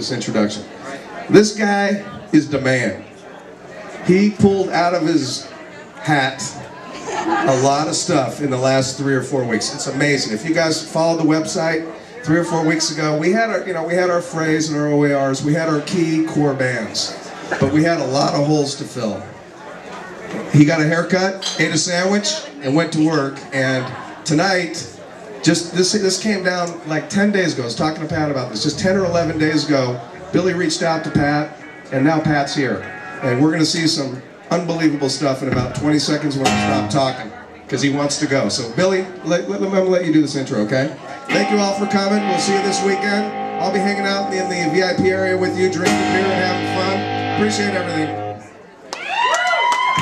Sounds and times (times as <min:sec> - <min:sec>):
Speech: 0:00.0 - 0:19.4, 0:20.3 - 0:48.4.